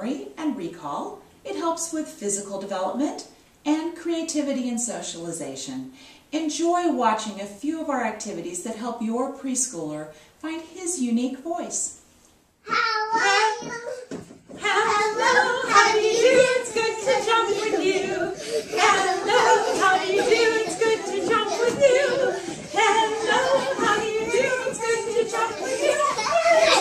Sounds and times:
Babbling: 12.7s - 14.1s
Child speech, kid speaking: 12.7s - 14.1s.

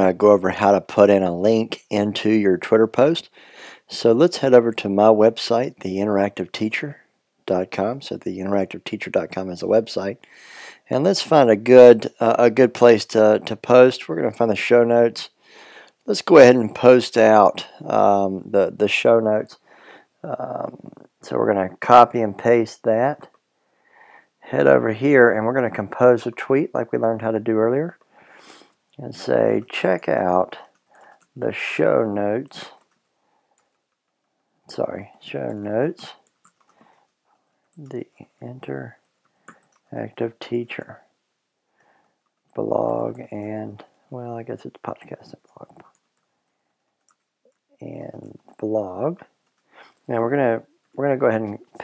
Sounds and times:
Speech: 0.0s - 3.3s, 3.9s - 15.4s, 16.0s - 19.6s, 20.2s - 23.4s, 24.4s - 28.0s, 29.0s - 30.8s, 31.4s - 32.8s, 34.7s - 36.3s, 37.8s - 39.0s, 39.9s - 41.1s, 42.6s - 45.8s, 47.8s - 49.3s, 50.1s - 51.8s.

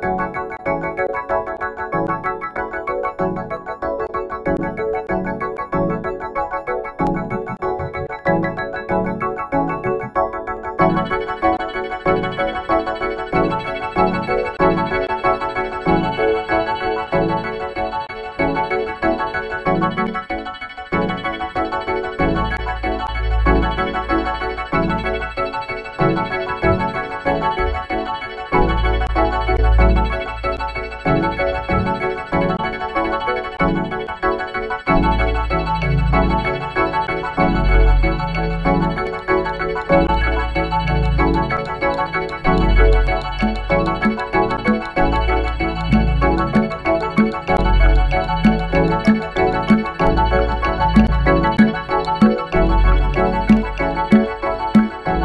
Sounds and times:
Music: 0.0s - 55.2s.

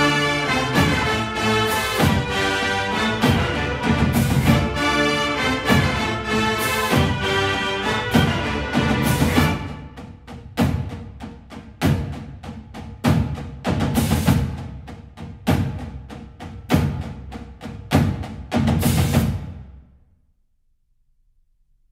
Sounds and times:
Music: 0.0s - 21.9s.

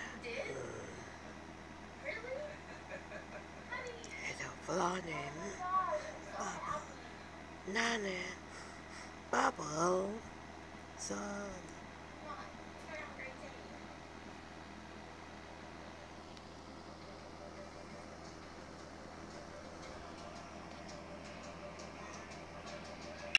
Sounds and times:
Music: 17.4s - 23.3s.

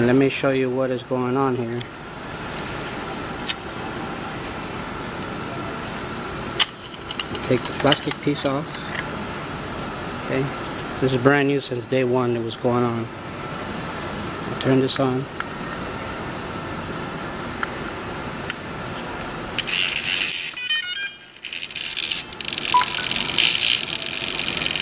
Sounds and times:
Speech: 0.0s - 1.9s, 7.4s - 8.7s, 10.3s - 13.1s, 14.6s - 15.3s.

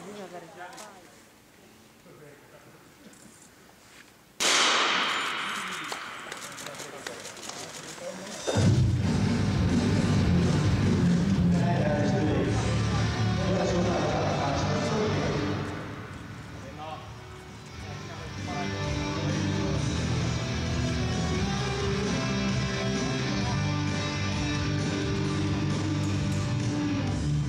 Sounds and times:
Music: 8.6s - 27.4s
Speech: 11.5s - 15.7s.

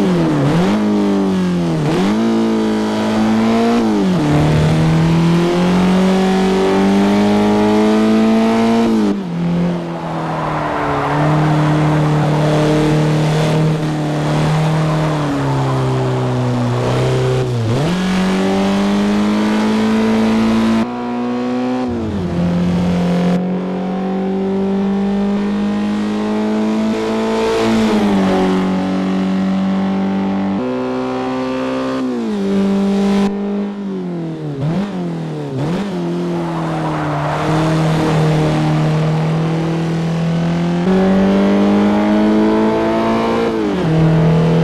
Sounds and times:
Skidding: 2.7s - 19.5s, 34.6s - 40.8s.

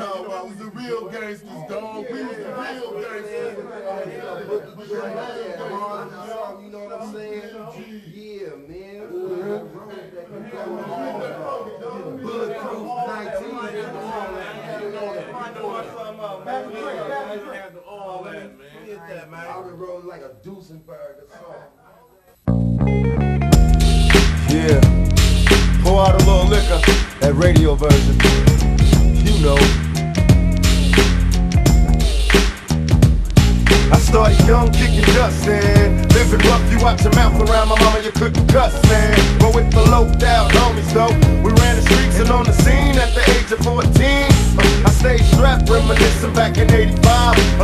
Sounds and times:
Speech: 0.0s - 22.4s, 24.5s - 24.9s, 25.8s - 29.7s
Music: 22.5s - 47.6s.

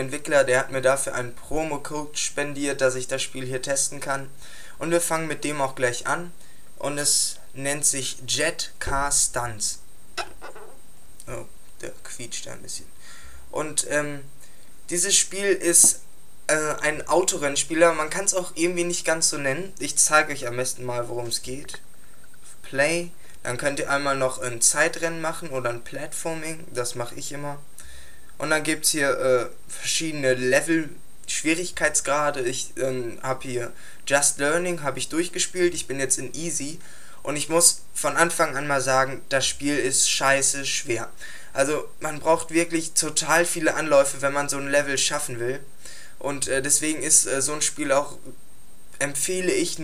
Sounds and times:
Speech: 0.0s - 12.9s, 13.5s - 14.3s, 14.9s - 21.8s, 22.5s - 27.6s, 28.4s - 48.4s, 49.0s - 49.8s.

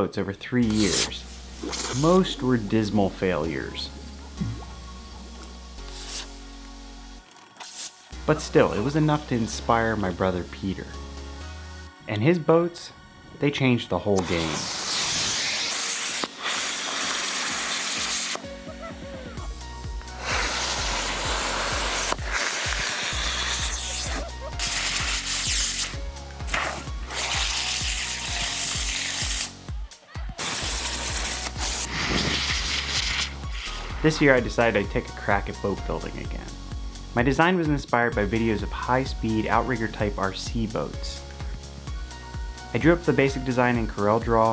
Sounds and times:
Speech: 0.0s - 1.2s, 1.9s - 3.9s, 8.3s - 11.0s, 12.1s - 14.6s, 34.0s - 36.5s, 37.2s - 41.2s, 42.7s - 44.5s
Music: 0.0s - 44.5s.

